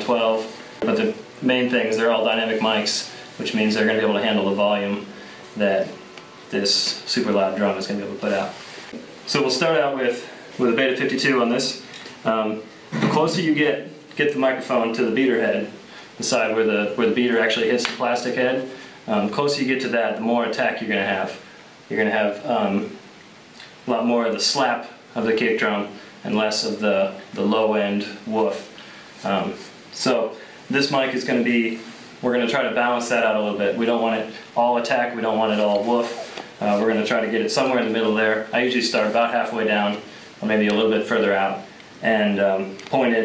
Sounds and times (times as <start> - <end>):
Speech: 0.0 - 8.7, 9.3 - 23.0, 23.8 - 43.2.